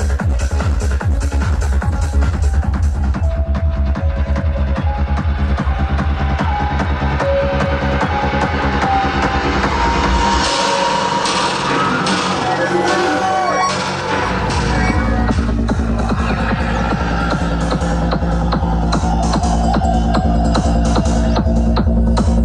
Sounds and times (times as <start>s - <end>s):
Crowd: 0.0s - 22.4s
Trance music: 0.0s - 22.4s.